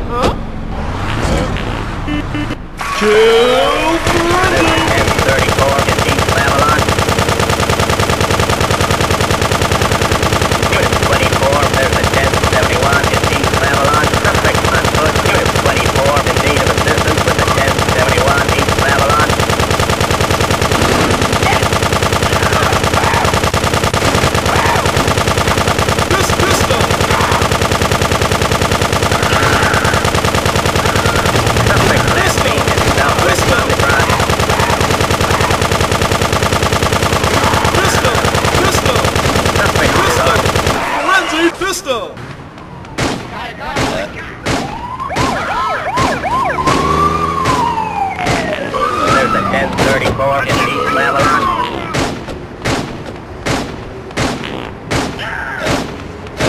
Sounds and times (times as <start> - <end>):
Machine gun: 4.0 - 41.2.